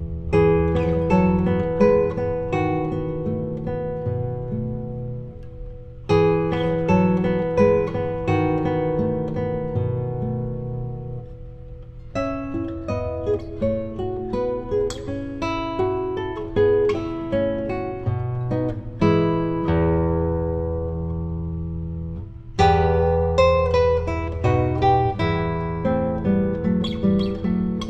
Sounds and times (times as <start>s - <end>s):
Strum: 0.0s - 27.8s.